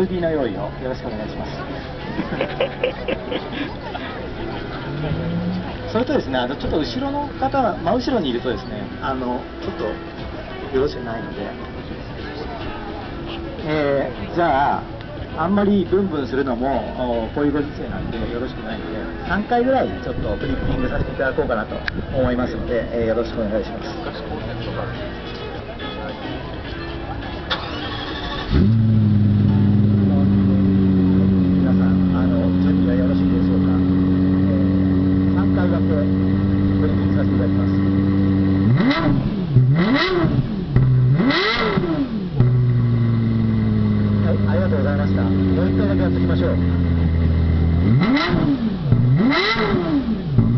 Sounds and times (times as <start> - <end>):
Speech: 0.0 - 27.1, 30.0 - 34.7, 35.3 - 37.8, 44.2 - 46.8.